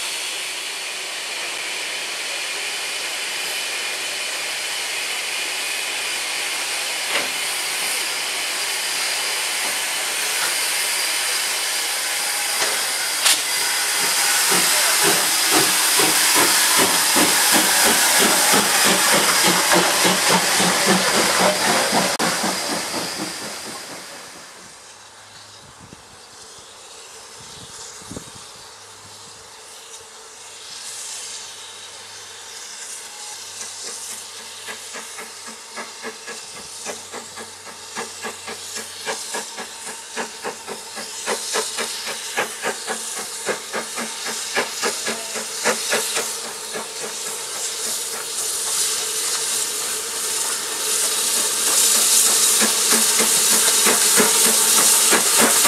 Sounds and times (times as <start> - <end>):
Hiss: 0.0 - 55.6.